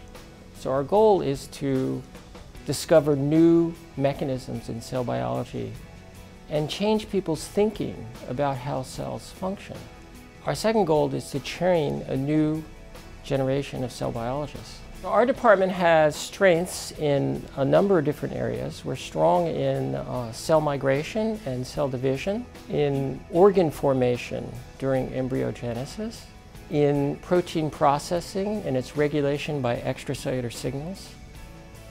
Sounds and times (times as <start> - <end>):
Music: 0.0 - 31.9
Speech: 0.6 - 5.8, 6.5 - 31.2.